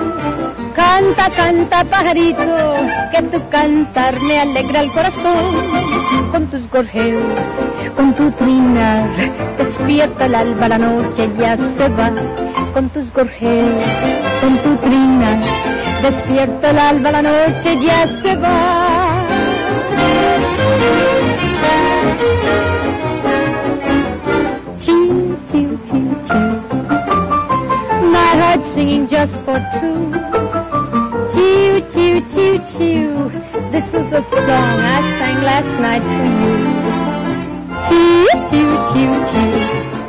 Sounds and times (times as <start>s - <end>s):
Music: 0.0s - 40.0s.